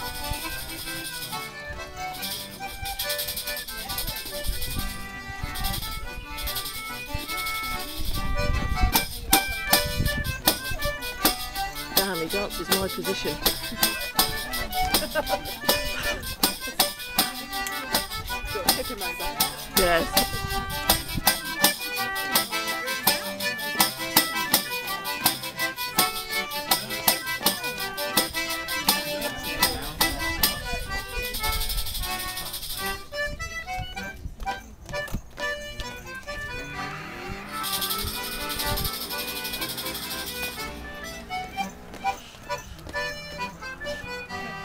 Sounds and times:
Music: 0.0 - 44.6
Speech: 11.9 - 20.4, 21.2 - 25.5, 26.7 - 28.1, 28.7 - 31.1.

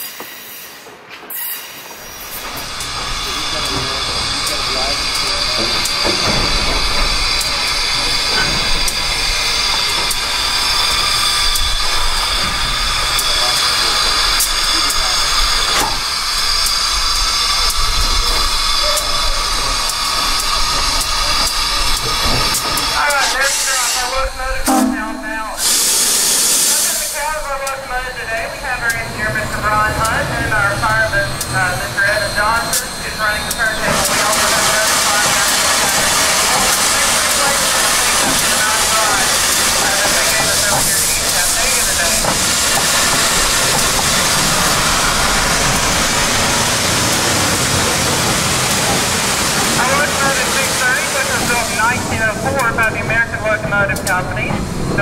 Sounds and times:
Hiss: 0.0 - 24.2, 25.6 - 27.3, 33.5 - 51.9.

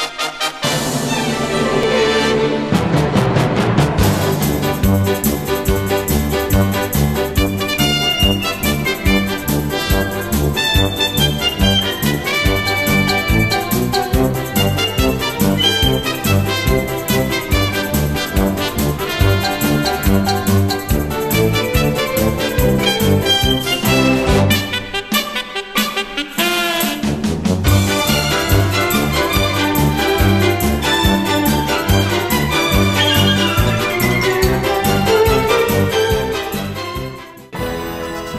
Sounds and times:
Music: 0.0 - 38.3.

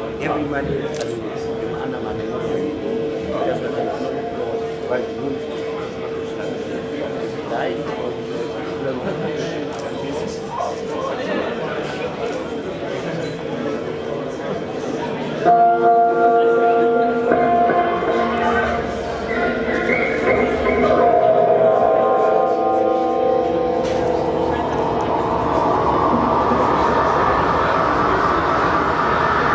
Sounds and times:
Speech: 0.0 - 15.5
Music: 15.5 - 25.0.

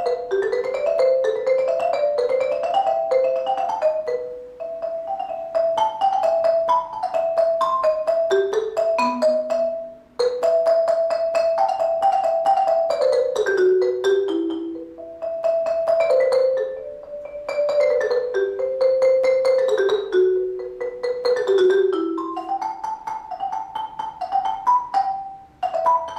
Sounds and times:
Marimba, xylophone: 0.0 - 26.1.

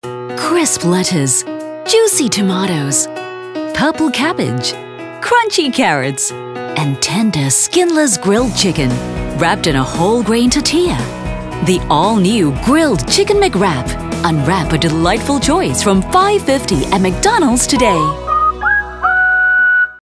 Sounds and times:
Music: 0.0 - 20.0
Speech: 0.4 - 3.1, 3.8 - 18.2.

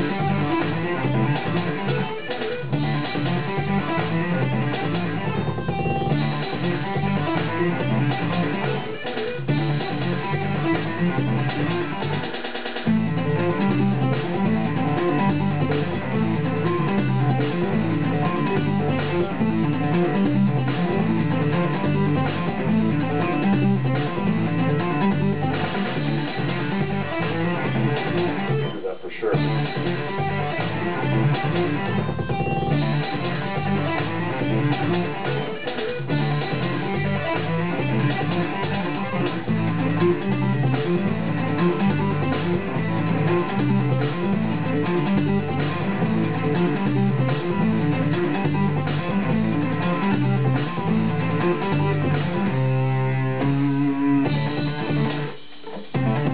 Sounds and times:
Bass guitar: 0.0 - 56.3
Strum: 29.4 - 55.4.

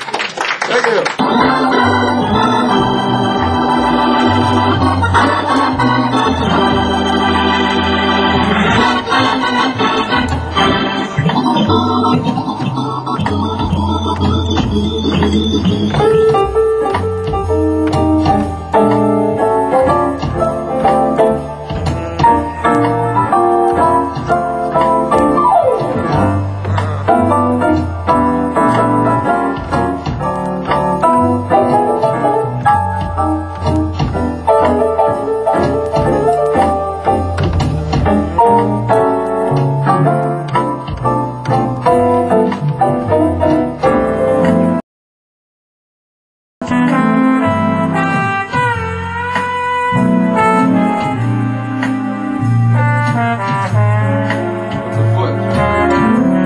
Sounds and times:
Hammond organ: 1.2 - 44.8, 46.6 - 56.4.

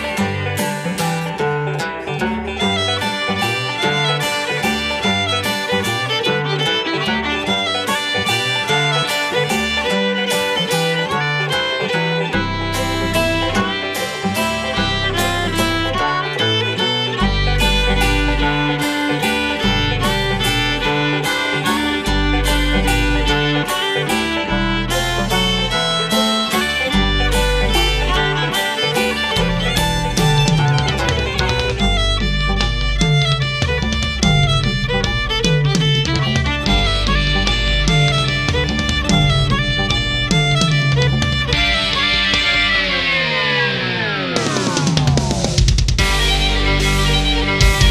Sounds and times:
Classical music: 0.0 - 44.7, 46.0 - 47.9
Bluegrass: 0.0 - 47.9
Electric guitar: 0.0 - 47.9
Heavy metal: 0.0 - 47.9
Tapping (guitar technique): 0.0 - 47.9
Violin, fiddle: 0.0 - 47.9.

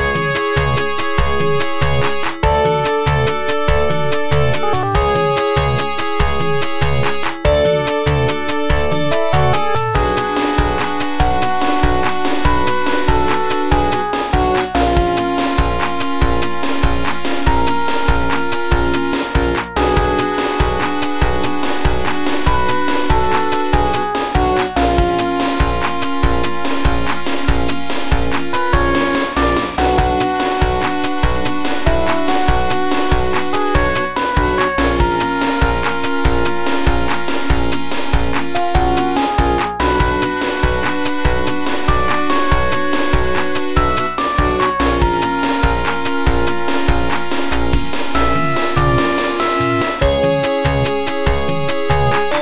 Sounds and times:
Video game music: 0.0 - 52.4.

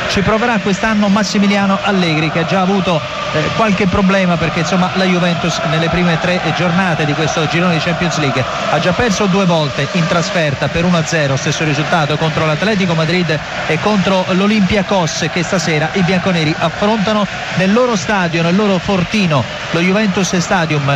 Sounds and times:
Speech: 0.0 - 20.9.

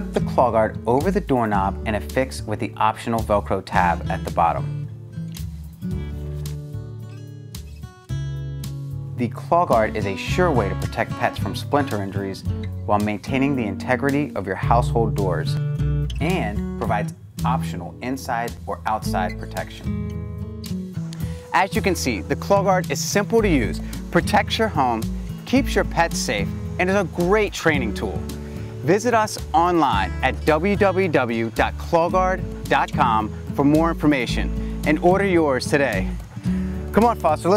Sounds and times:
Speech: 0.0 - 4.7, 9.2 - 15.6, 16.2 - 19.9, 21.5 - 28.2, 28.8 - 36.2, 36.9 - 37.5
Music: 0.0 - 37.5.

